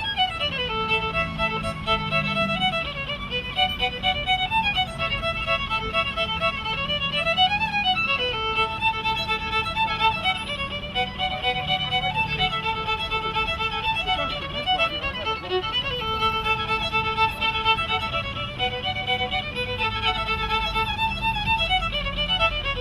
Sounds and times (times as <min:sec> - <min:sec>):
Violin, fiddle: 0:00.0 - 0:22.8.